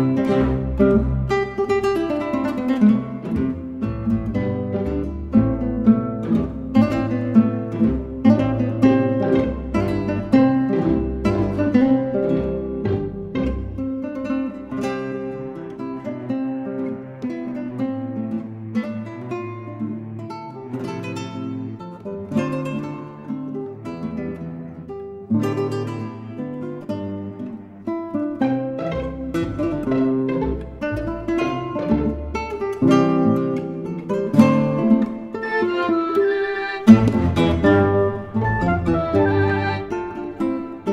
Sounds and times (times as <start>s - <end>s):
Acoustic guitar: 0.0s - 40.9s.